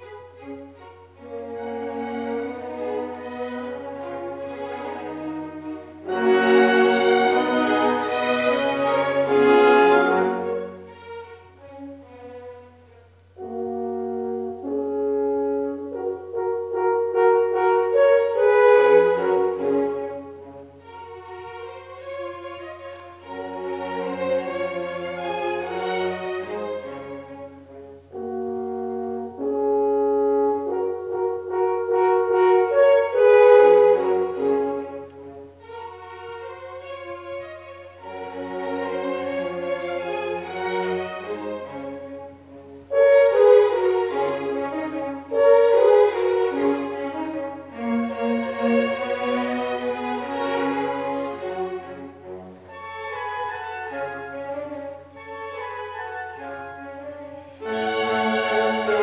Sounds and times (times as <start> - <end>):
Brass instrument: 0.0 - 59.0
Orchestra: 0.0 - 59.0.